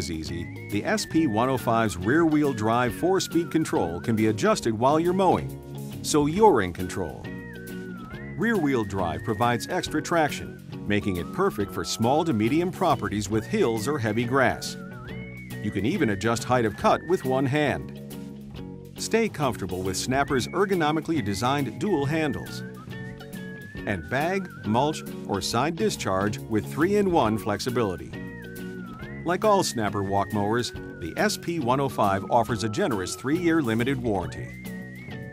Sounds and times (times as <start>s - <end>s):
Speech: 0.0s - 5.5s, 6.1s - 7.3s, 8.4s - 14.8s, 15.6s - 17.8s, 19.0s - 22.6s, 23.9s - 28.2s, 29.3s - 34.6s
Music: 0.0s - 35.3s.